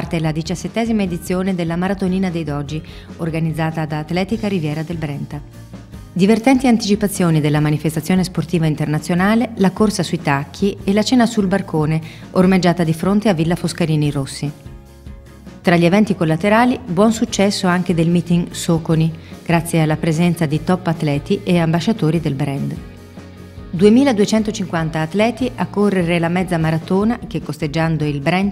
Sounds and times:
Speech: 0.0s - 5.4s, 6.2s - 14.6s, 15.7s - 22.8s, 23.8s - 28.5s
Music: 0.0s - 28.5s.

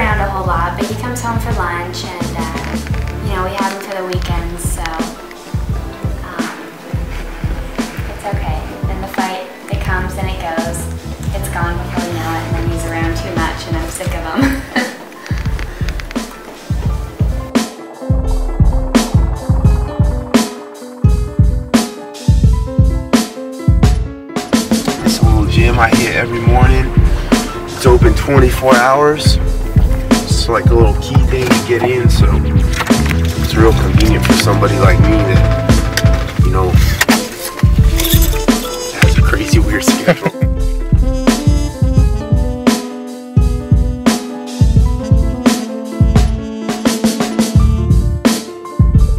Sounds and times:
Music: 0.0s - 49.1s.

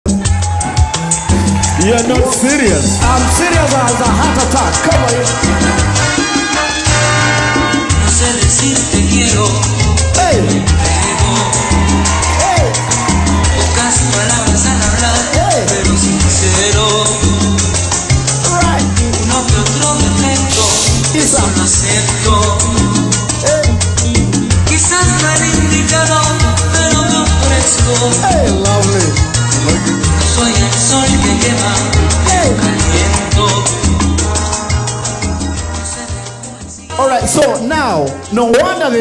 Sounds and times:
Salsa music: 0.0s - 39.0s
Speech: 1.8s - 5.2s, 36.9s - 39.0s.

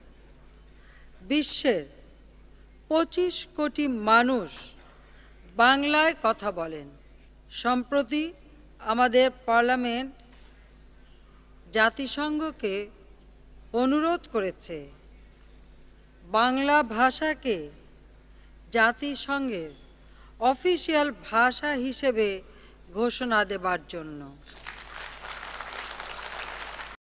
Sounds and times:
Narration, monologue: 0.0s - 24.5s
Female speech, woman speaking: 1.3s - 2.0s, 2.9s - 4.8s, 5.6s - 10.2s, 11.7s - 13.0s, 13.8s - 15.0s, 16.3s - 17.8s, 18.8s - 19.8s, 20.4s - 24.4s.

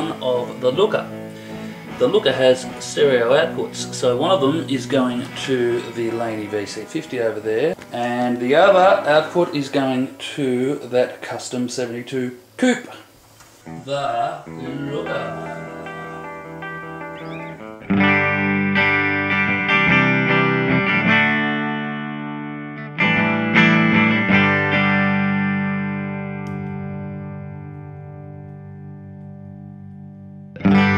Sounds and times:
Speech: 0.0s - 1.1s, 2.0s - 13.1s, 13.8s - 15.6s
Music: 0.0s - 10.8s, 13.6s - 30.9s.

